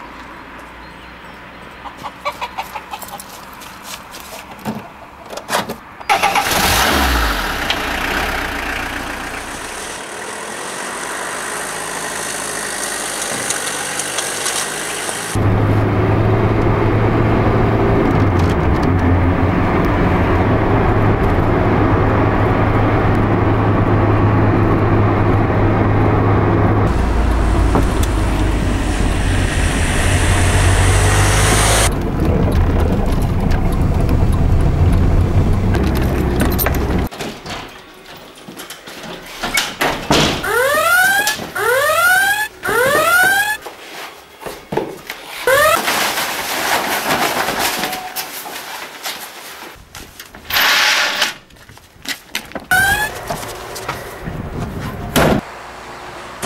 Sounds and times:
Car: 4.2 - 37.1, 40.4 - 43.6, 52.7 - 56.4.

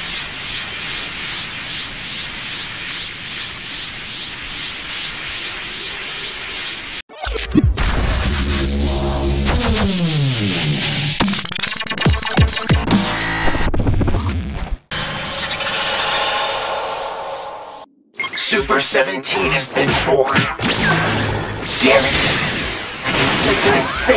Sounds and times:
Dubstep: 7.2 - 14.2, 18.4 - 24.1.

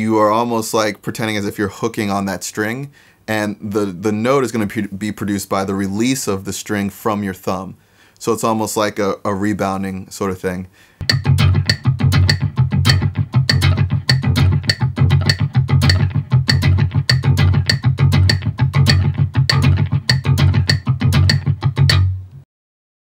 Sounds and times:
Music: 11.0 - 22.4.

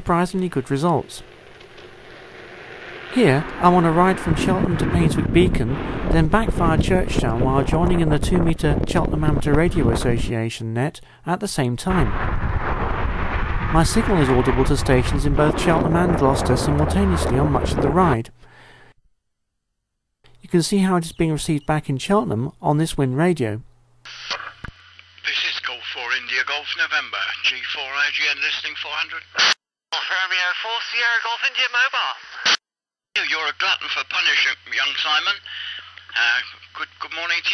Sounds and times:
Speech: 0.0 - 1.3, 3.2 - 12.1, 13.7 - 18.4, 20.4 - 24.5, 25.3 - 32.2, 33.2 - 37.5.

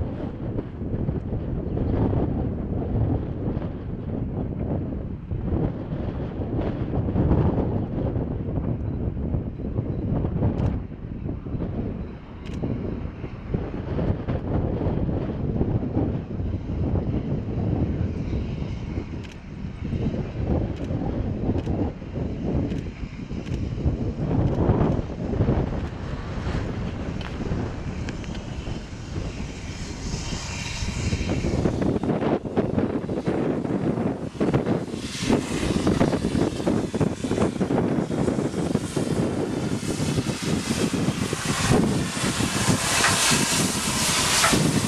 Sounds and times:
Vehicle: 0.0 - 44.8.

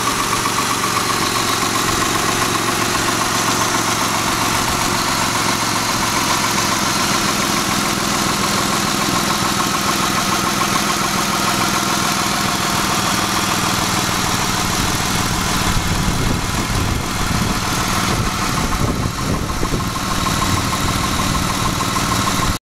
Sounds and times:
Vehicle: 0.0 - 22.6.

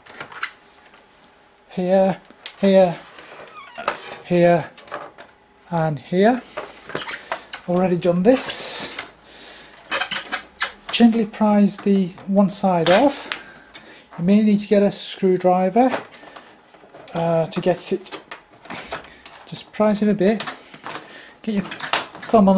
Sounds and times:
Inside, small room: 0.0 - 22.5
Speech: 1.7 - 3.0, 4.3 - 4.7, 5.7 - 6.4, 7.7 - 8.9, 10.9 - 13.3, 14.2 - 16.0, 17.1 - 18.2, 19.5 - 20.5, 21.4 - 22.5.

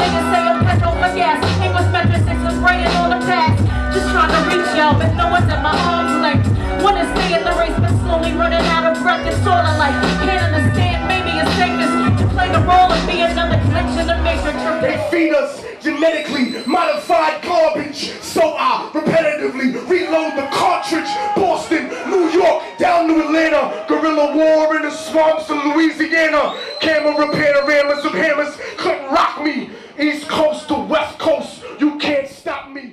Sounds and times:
Speech: 14.4 - 32.9.

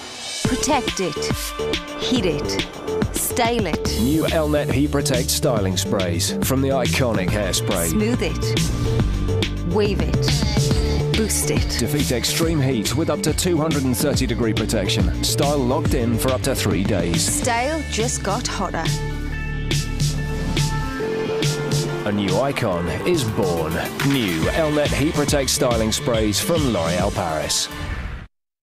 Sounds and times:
Music: 0.0 - 28.3
Speech: 0.5 - 8.5, 9.7 - 19.0, 22.1 - 27.7.

